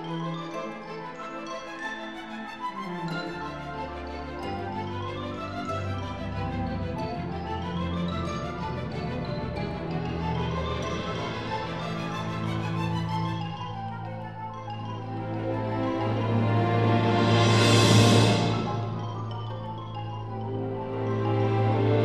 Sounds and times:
Music: 0:00.0 - 0:22.0.

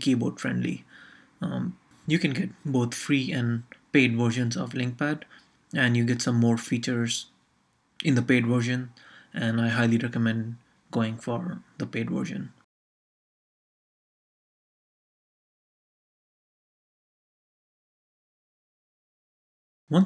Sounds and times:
Speech: 0:00.0 - 0:07.3, 0:08.0 - 0:12.7.

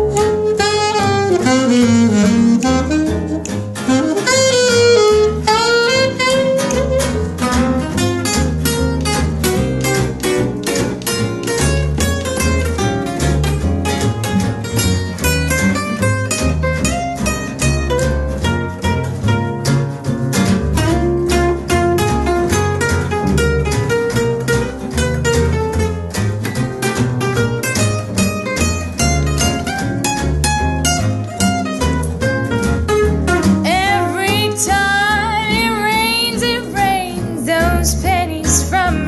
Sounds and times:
Guitar: 0:00.0 - 0:39.0
Swing music: 0:00.0 - 0:39.0.

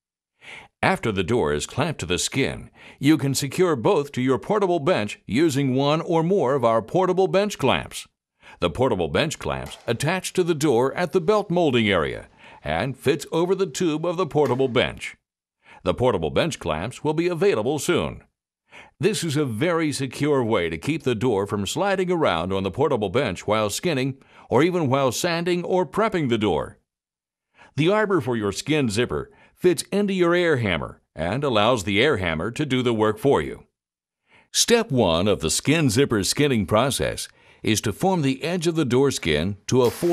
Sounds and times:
Speech: 0:00.8 - 0:15.2, 0:15.8 - 0:18.3, 0:19.0 - 0:26.8, 0:27.8 - 0:33.7, 0:34.5 - 0:40.1.

